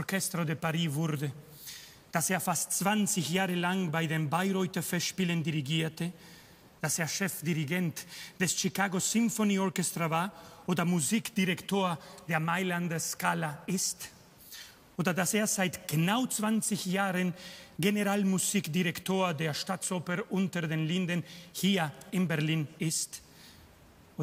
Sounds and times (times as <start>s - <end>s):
Speech: 0.0s - 1.4s, 2.2s - 6.2s, 6.8s - 14.2s, 15.0s - 23.2s.